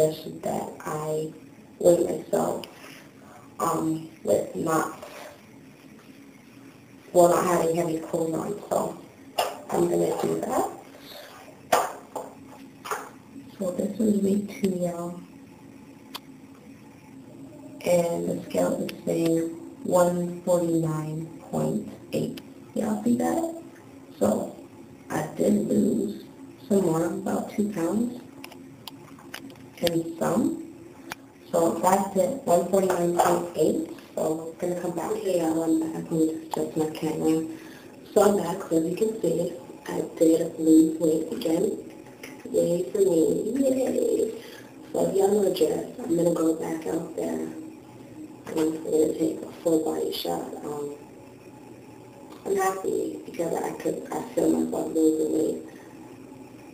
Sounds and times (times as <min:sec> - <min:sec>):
Speech: 0:00.0 - 0:02.8, 0:03.6 - 0:05.4, 0:07.1 - 0:11.2, 0:12.9 - 0:15.3, 0:17.5 - 0:28.3, 0:29.8 - 0:30.7, 0:31.4 - 0:47.7, 0:48.4 - 0:51.1, 0:52.4 - 0:55.7
Inside, small room: 0:00.0 - 0:56.7.